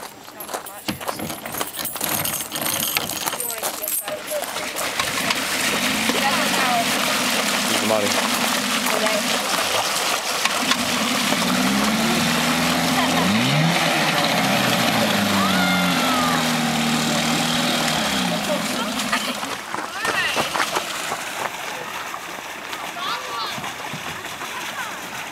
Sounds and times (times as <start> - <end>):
Motorboat, speedboat: 4.1 - 25.3.